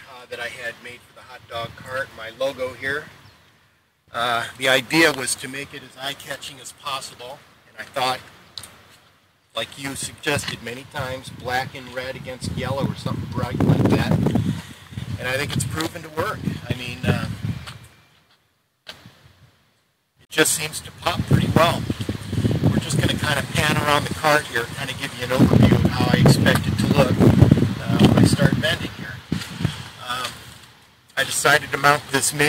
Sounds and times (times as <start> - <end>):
Speech: 0.0 - 3.1, 4.1 - 8.2, 9.6 - 14.2, 15.2 - 17.4, 20.3 - 21.8, 22.7 - 27.2, 27.8 - 29.2, 30.0 - 30.4, 31.2 - 32.4.